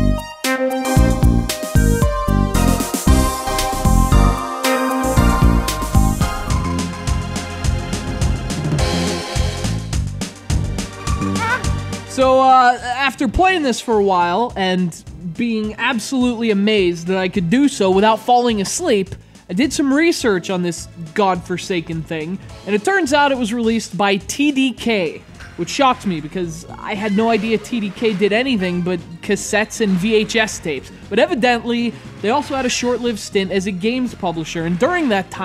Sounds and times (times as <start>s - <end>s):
Music: 0.0s - 35.4s
Speech: 12.1s - 35.4s.